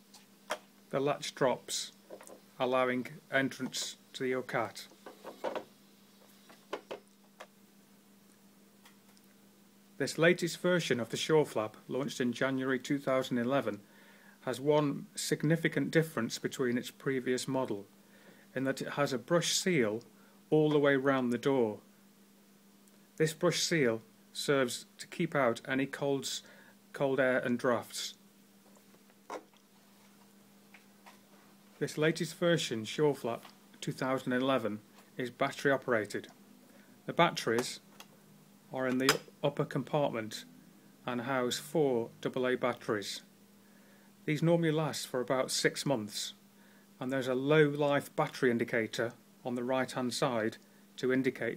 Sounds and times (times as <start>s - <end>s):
Speech: 0.9s - 2.0s, 2.6s - 4.9s, 10.0s - 13.8s, 14.4s - 17.9s, 18.5s - 21.9s, 23.2s - 28.2s, 31.8s - 36.4s, 37.0s - 37.9s, 38.7s - 43.3s, 44.2s - 46.4s, 47.0s - 51.5s.